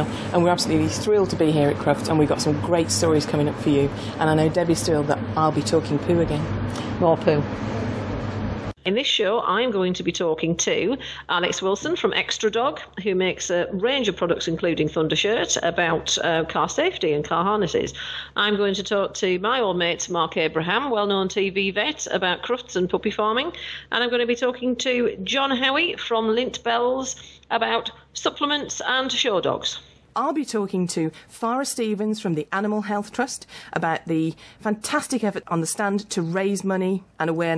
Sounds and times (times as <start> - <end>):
Speech: 0.0 - 7.5, 8.8 - 37.5.